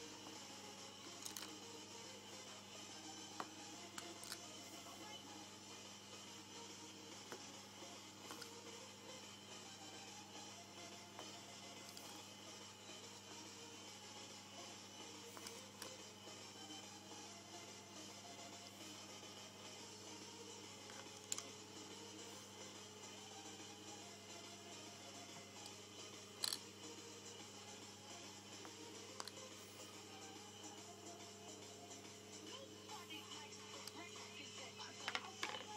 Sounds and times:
Music: 0:00.0 - 0:35.7.

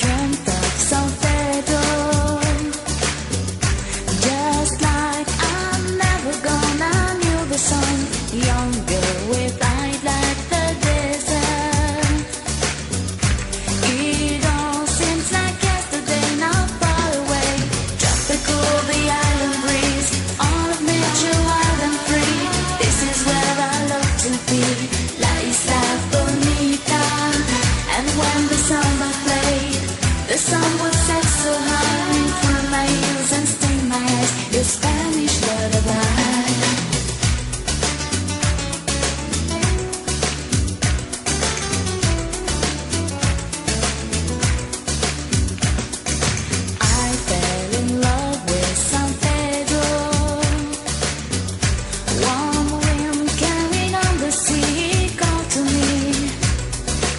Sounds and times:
Music of Asia: 0:00.0 - 0:57.1.

